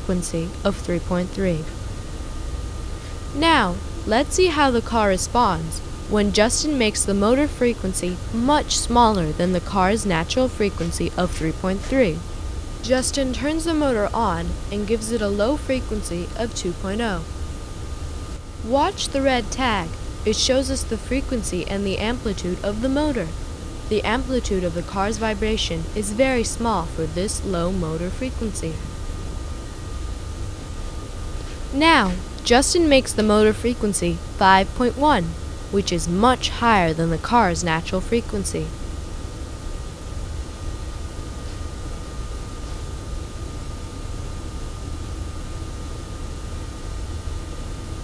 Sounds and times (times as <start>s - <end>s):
Speech: 0.0s - 1.7s, 3.3s - 17.3s, 18.7s - 28.8s, 31.7s - 38.7s.